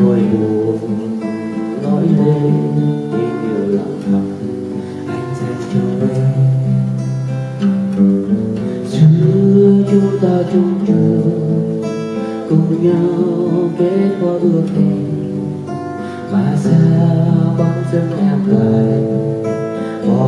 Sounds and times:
Acoustic guitar: 0.0 - 20.2.

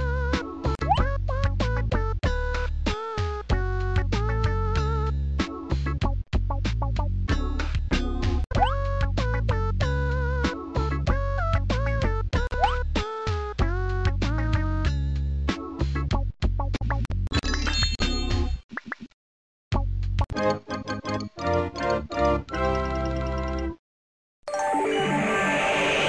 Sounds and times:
Music: 0.0 - 18.6, 19.7 - 23.8, 24.5 - 26.0.

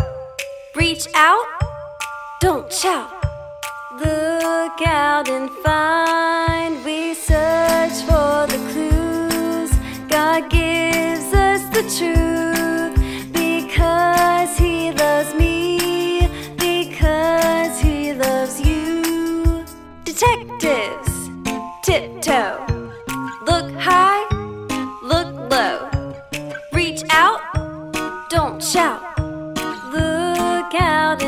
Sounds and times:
Music: 0.0 - 31.2.

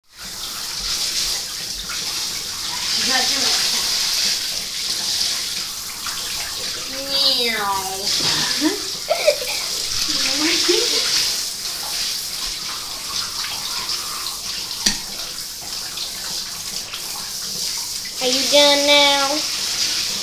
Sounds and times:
Bathtub (filling or washing): 0.0 - 20.2
Speech: 2.9 - 3.9, 6.9 - 11.1, 18.2 - 19.5.

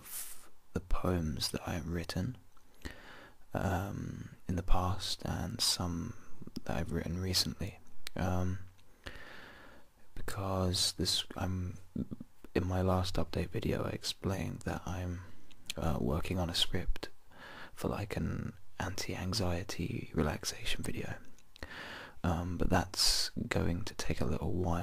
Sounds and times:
Speech: 0.0 - 2.4, 3.5 - 8.7, 10.2 - 17.2, 17.8 - 21.3, 22.2 - 24.8
Whispering: 17.8 - 21.3.

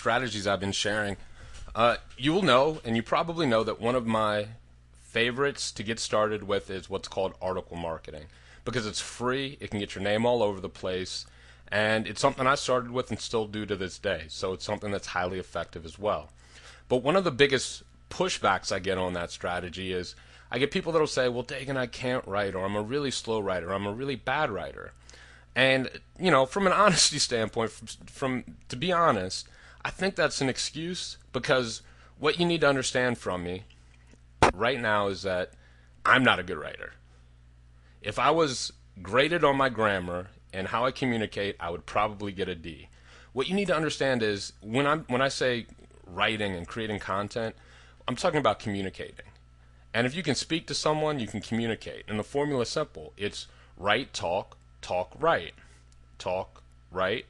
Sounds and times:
Speech: 0.0 - 25.0, 25.6 - 33.7, 34.5 - 37.0, 38.0 - 55.6, 56.2 - 57.3.

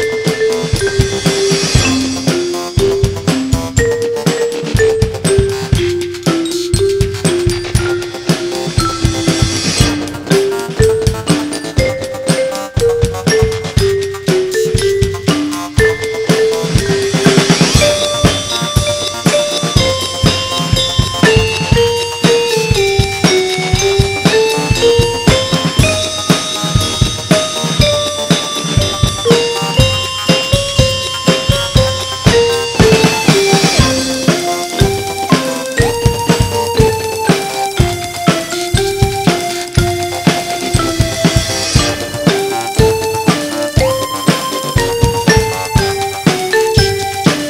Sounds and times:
Dance music: 0.0 - 47.5
Exciting music: 0.0 - 47.5.

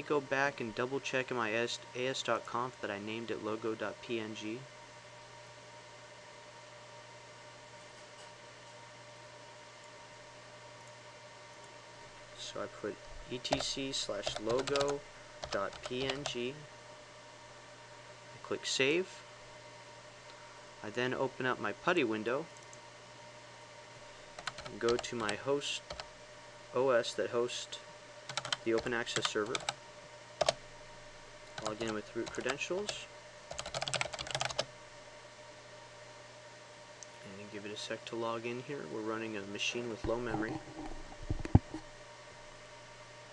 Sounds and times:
Computer keyboard: 13.5 - 16.4, 24.4 - 26.1, 28.3 - 29.8, 30.4 - 30.6, 31.6 - 34.7.

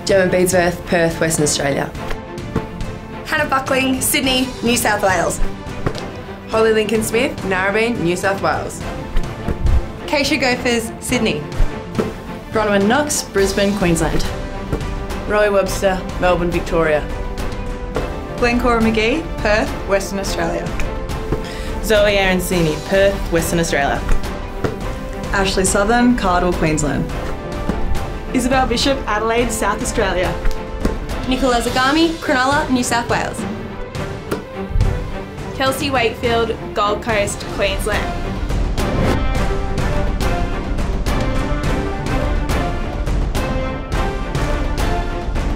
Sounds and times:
Music: 0.0 - 45.5.

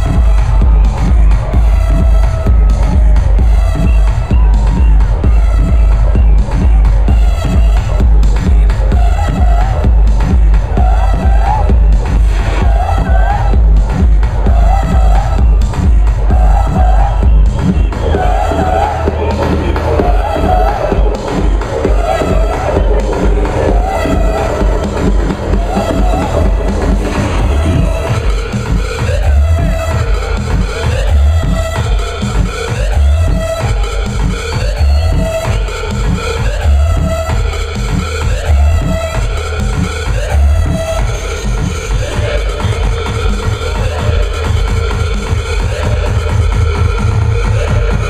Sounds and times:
Dance music: 0.0 - 48.1
Pop music: 0.0 - 48.1.

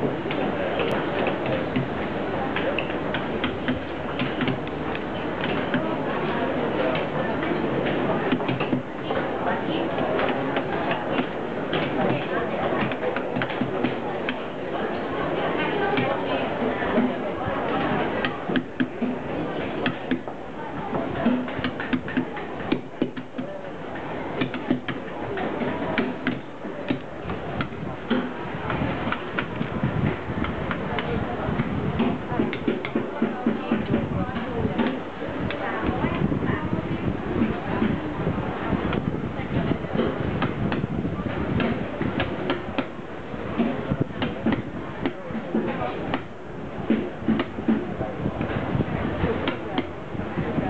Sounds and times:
Speech: 0.0 - 50.6.

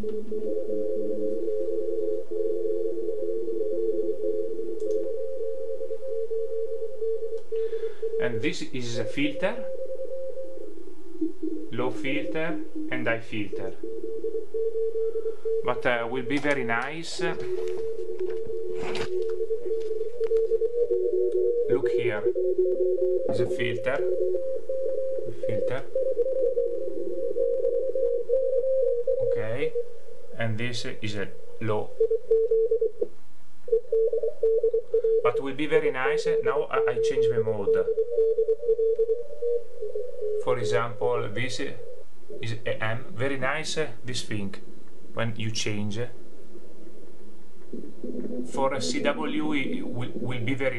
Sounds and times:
Speech: 8.2 - 9.6, 11.8 - 13.8, 15.7 - 17.4, 21.7 - 22.3, 23.3 - 24.0, 25.5 - 25.9, 29.4 - 29.8, 30.4 - 31.9, 35.3 - 37.9, 40.5 - 41.8, 42.4 - 44.6, 45.2 - 46.2, 48.6 - 50.7.

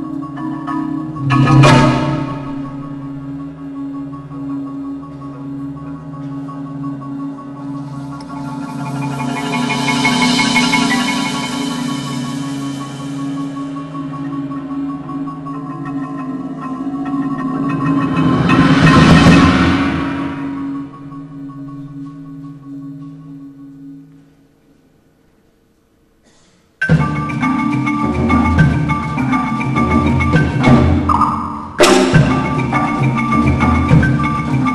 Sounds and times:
Percussion: 0.0 - 23.2, 26.6 - 34.7.

